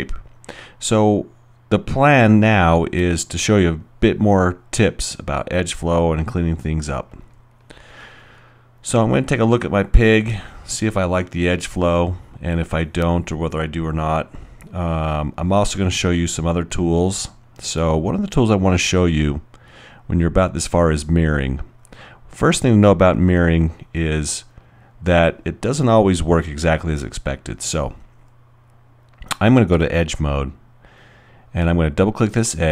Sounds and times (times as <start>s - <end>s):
Speech: 0.0s - 0.2s, 0.8s - 7.3s, 8.8s - 19.5s, 20.1s - 21.7s, 22.3s - 28.0s, 29.3s - 30.6s, 31.5s - 32.7s.